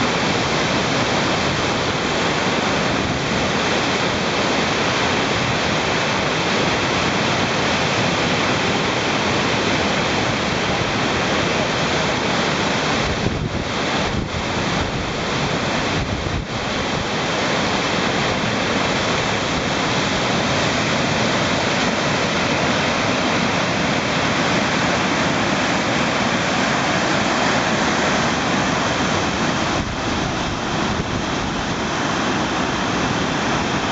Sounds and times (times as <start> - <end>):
Waterfall: 0.0 - 33.9.